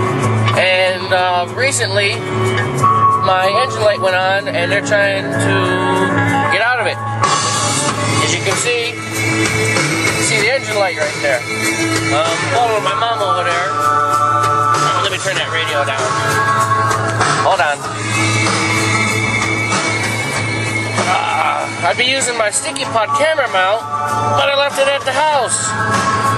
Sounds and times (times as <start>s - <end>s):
Music: 0.0s - 26.3s
Speech: 0.6s - 2.2s, 3.2s - 7.0s, 8.2s - 9.0s, 10.2s - 11.4s, 12.1s - 13.7s, 14.8s - 16.1s, 17.4s - 17.8s, 21.1s - 23.8s, 24.4s - 25.7s.